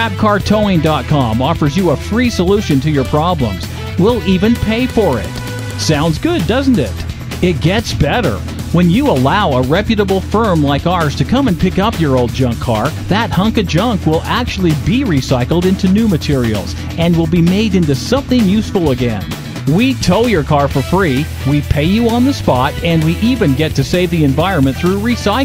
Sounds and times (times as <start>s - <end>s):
Music: 0.0s - 25.4s
Speech: 0.0s - 25.4s.